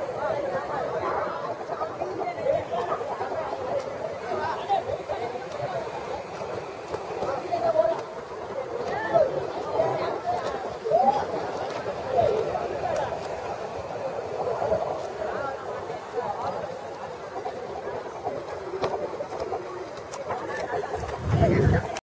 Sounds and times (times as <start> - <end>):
Speech: 0.0 - 22.0.